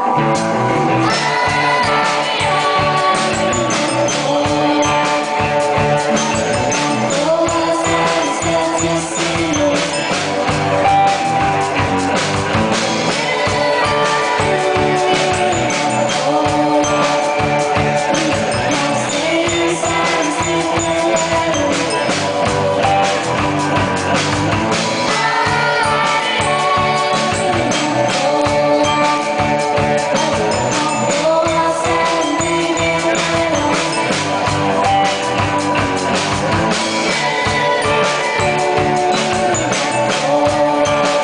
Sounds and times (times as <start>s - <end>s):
Music: 0.0s - 41.2s.